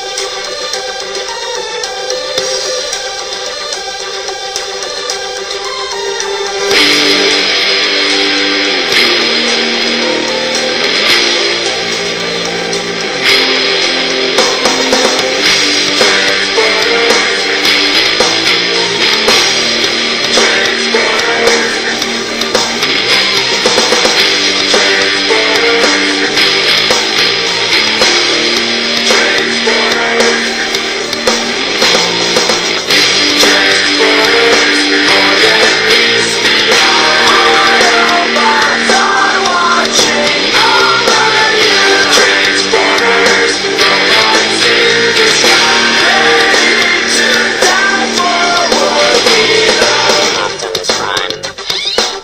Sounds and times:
Music: 0.0s - 52.2s.

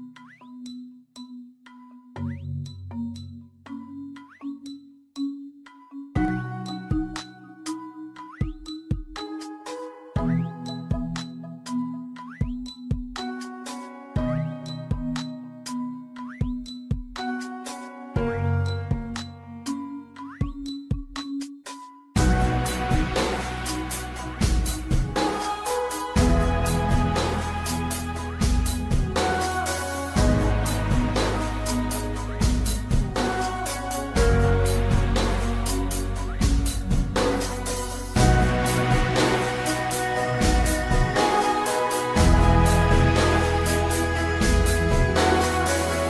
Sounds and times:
Music: 0.0s - 46.0s.

